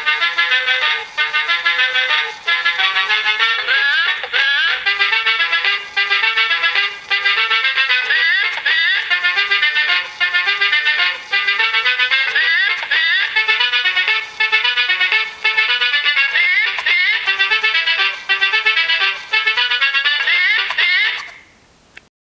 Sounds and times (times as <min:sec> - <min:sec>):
Music: 0:00.0 - 0:21.5.